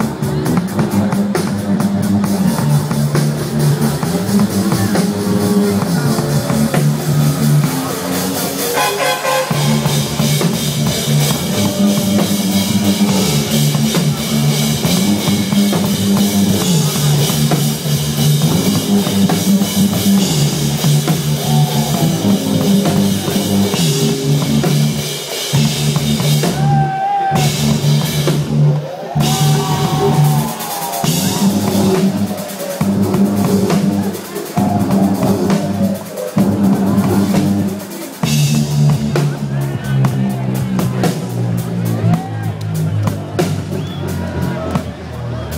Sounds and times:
Crowd: 0.0s - 45.5s
Rock music: 0.0s - 45.5s.

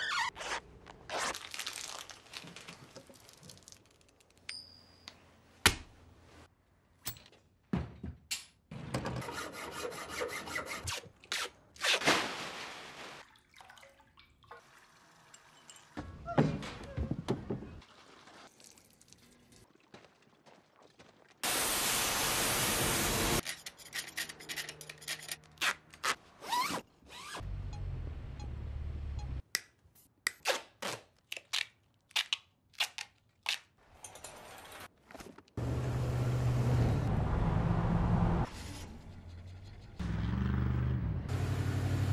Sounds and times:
Crackle: 1.3s - 4.5s.

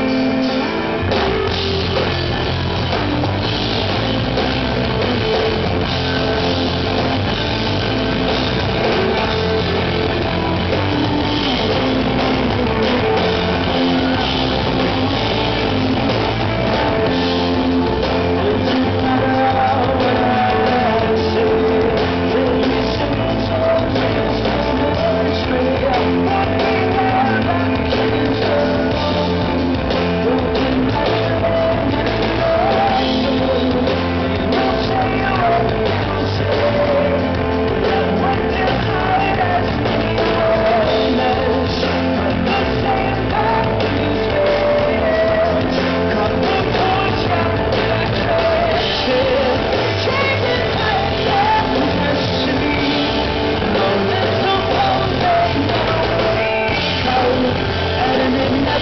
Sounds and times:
Music: 0.0s - 58.8s.

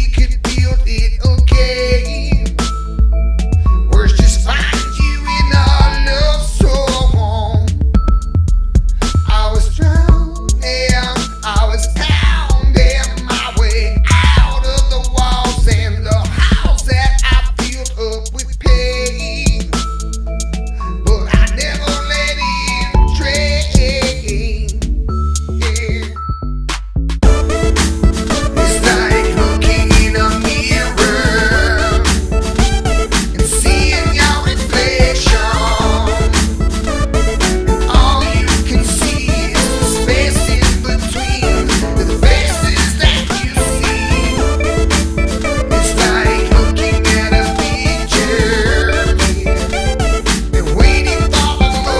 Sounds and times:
Independent music: 0.0s - 51.9s.

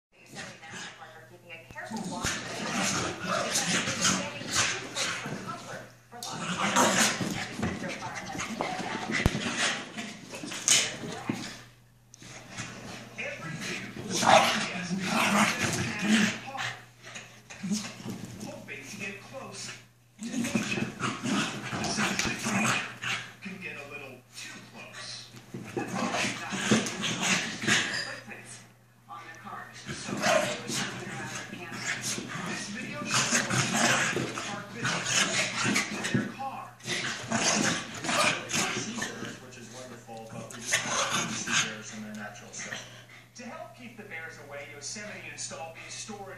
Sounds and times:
Speech: 0.2s - 9.3s, 10.3s - 11.7s, 13.2s - 16.8s, 17.7s - 22.7s, 23.4s - 27.0s, 27.8s - 46.3s
Growling: 1.9s - 5.5s, 6.2s - 11.6s, 12.2s - 18.2s, 20.2s - 23.4s, 29.8s - 39.4s.

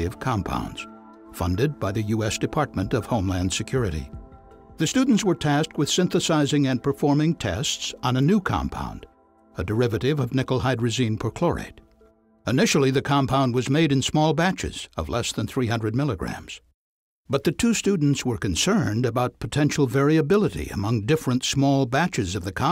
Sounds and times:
Speech: 0.0s - 4.2s, 4.8s - 11.8s, 12.5s - 16.6s, 17.3s - 22.7s.

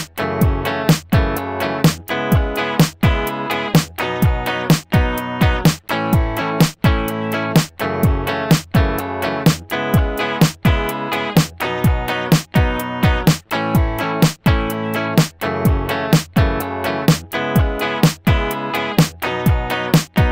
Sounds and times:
Music: 0.0s - 20.3s.

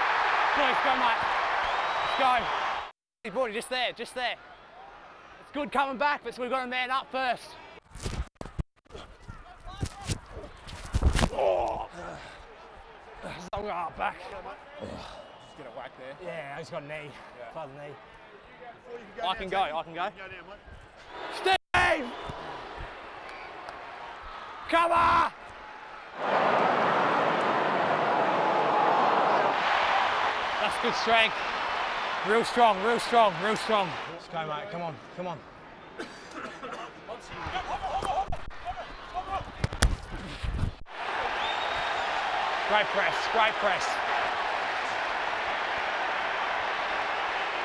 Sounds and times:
Crowd: 0.0s - 7.9s, 9.0s - 47.6s.

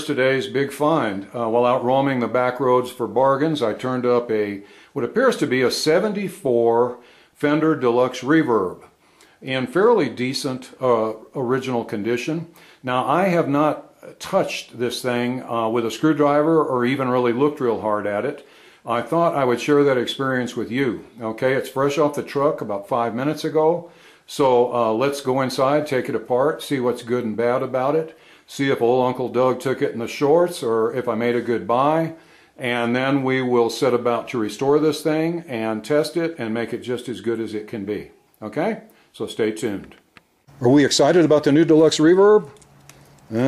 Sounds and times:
Speech: 0.0s - 40.0s, 40.6s - 42.6s.

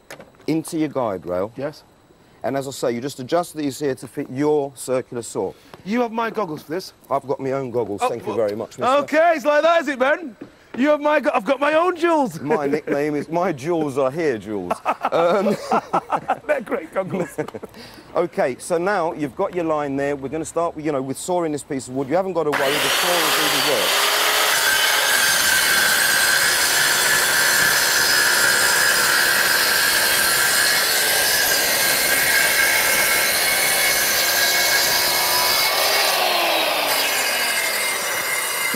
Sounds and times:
Power tool: 22.5s - 38.7s.

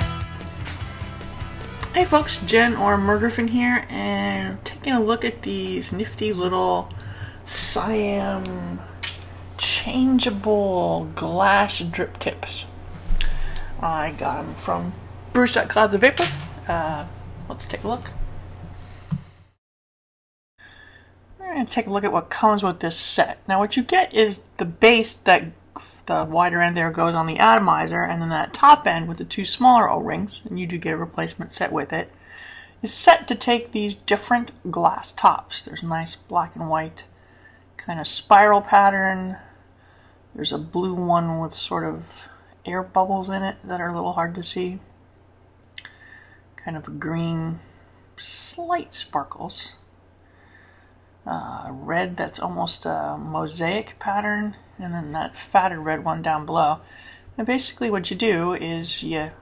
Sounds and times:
Inside, small room: 0.0s - 19.6s, 20.6s - 59.4s
Speech: 1.9s - 6.9s, 7.5s - 9.0s, 9.6s - 12.7s, 13.8s - 18.2s, 21.4s - 32.1s, 32.8s - 37.1s, 37.8s - 39.5s, 40.4s - 44.9s, 46.6s - 49.8s, 51.2s - 56.8s, 57.4s - 59.4s.

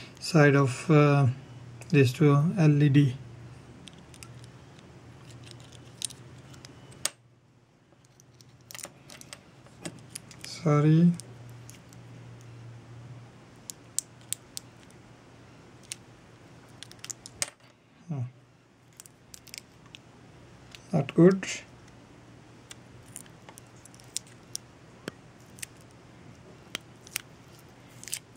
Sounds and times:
Speech: 0.2s - 3.2s, 10.5s - 11.2s, 18.1s - 18.4s, 20.9s - 21.7s.

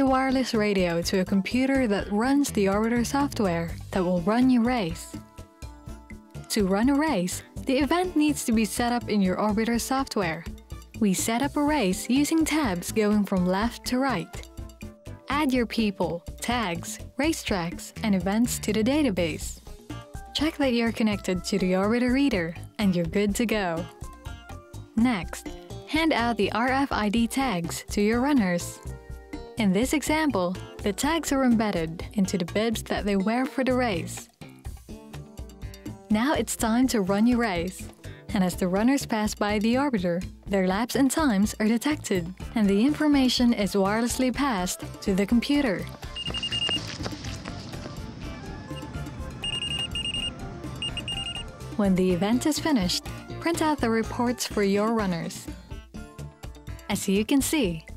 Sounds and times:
Speech: 0.0s - 5.2s, 6.5s - 14.4s, 15.3s - 19.6s, 20.4s - 23.9s, 25.0s - 28.8s, 29.6s - 34.3s, 36.1s - 46.0s, 51.8s - 55.5s, 56.9s - 57.8s
Music: 0.0s - 57.9s.

